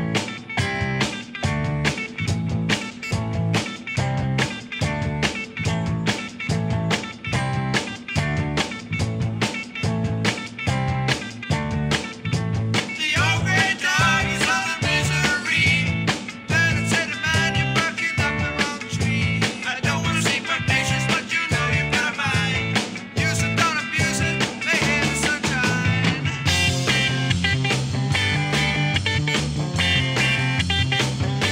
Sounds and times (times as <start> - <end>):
Music: 0.0 - 31.5.